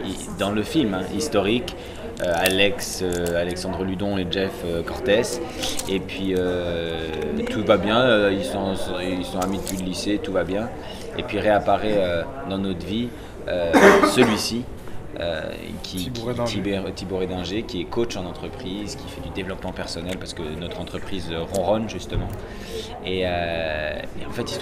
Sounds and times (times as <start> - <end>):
Speech: 0.0 - 24.6.